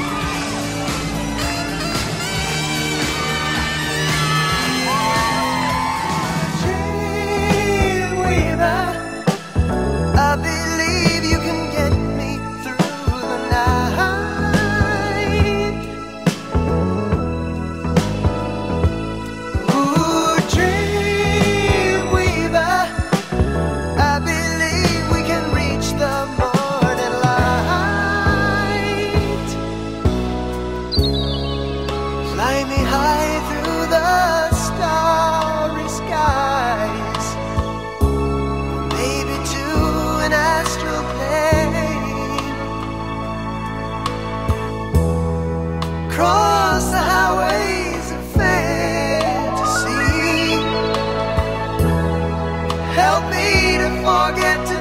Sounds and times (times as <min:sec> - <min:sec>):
Saxophone: 0:00.0 - 0:09.6, 0:48.4 - 0:53.9
Rhythm and blues: 0:00.0 - 0:54.8
Soul music: 0:00.0 - 0:54.8
Singing: 0:04.8 - 0:09.6, 0:10.2 - 0:16.4, 0:19.6 - 0:23.4, 0:24.0 - 0:29.7, 0:32.2 - 0:37.6, 0:38.9 - 0:42.8, 0:46.1 - 0:54.8.